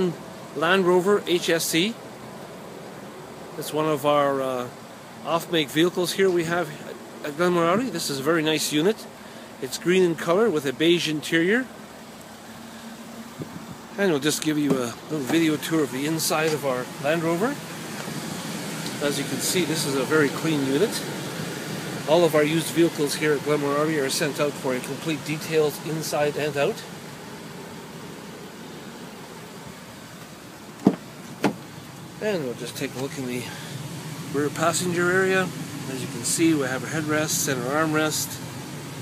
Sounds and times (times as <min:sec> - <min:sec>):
Speech: 0:00.0 - 0:02.0, 0:03.6 - 0:11.7, 0:14.0 - 0:17.6, 0:19.0 - 0:21.1, 0:22.1 - 0:26.9, 0:32.2 - 0:33.6, 0:34.3 - 0:38.4
Door: 0:30.8 - 0:31.6.